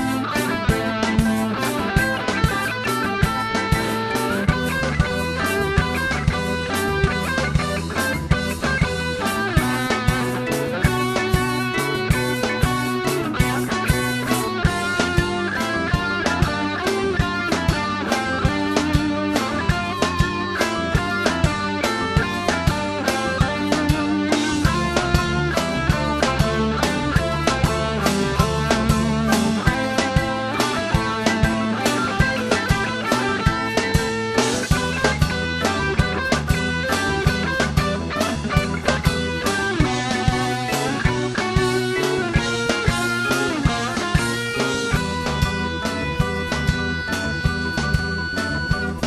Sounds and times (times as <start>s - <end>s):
Musical instrument: 0.0s - 49.0s
Progressive rock: 0.0s - 49.0s
Ska: 0.0s - 49.0s.